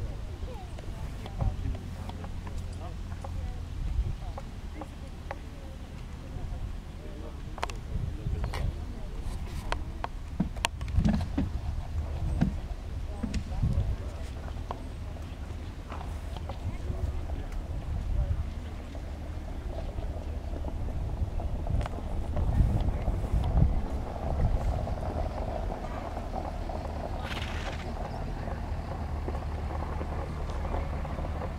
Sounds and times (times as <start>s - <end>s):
Speech: 0.0s - 10.1s, 11.7s - 31.5s
Clip-clop: 0.0s - 31.5s.